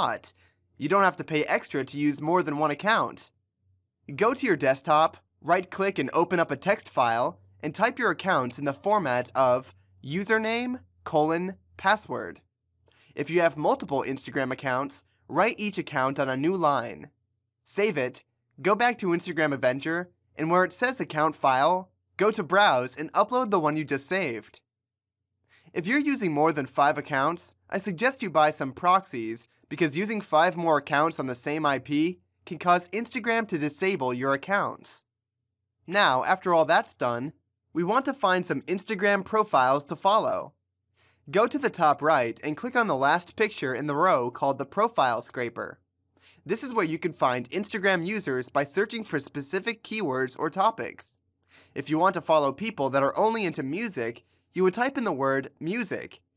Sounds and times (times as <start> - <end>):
Speech: 0.0 - 3.3, 4.1 - 12.4, 13.2 - 17.1, 17.7 - 24.6, 25.8 - 35.1, 35.9 - 40.5, 41.3 - 45.8, 46.5 - 51.2, 51.8 - 56.2.